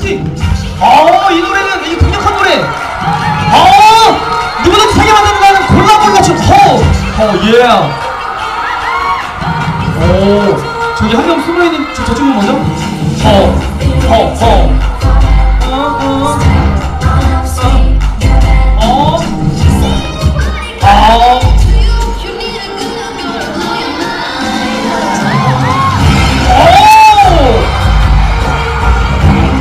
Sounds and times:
Music: 0:00.0 - 0:29.6.

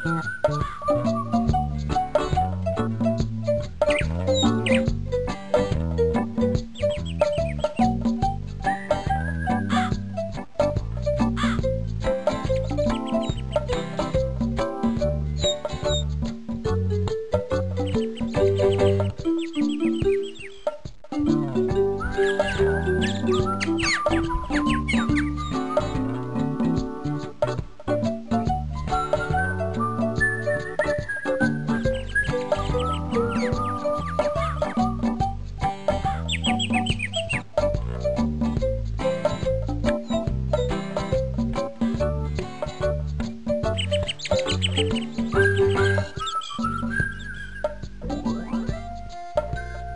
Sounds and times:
Music: 0:00.0 - 0:49.9.

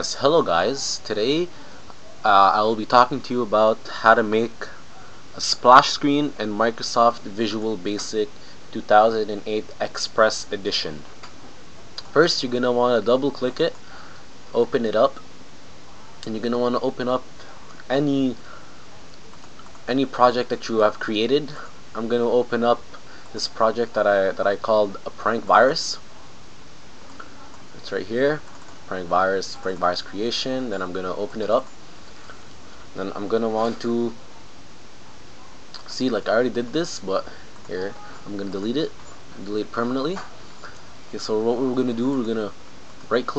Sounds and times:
Speech: 0:00.0 - 0:01.5, 0:02.2 - 0:04.8, 0:05.4 - 0:11.1, 0:12.0 - 0:13.8, 0:14.5 - 0:15.2, 0:16.2 - 0:17.3, 0:17.9 - 0:18.5, 0:19.9 - 0:26.1, 0:27.2 - 0:31.7, 0:33.0 - 0:34.2, 0:35.8 - 0:40.3, 0:41.1 - 0:43.3.

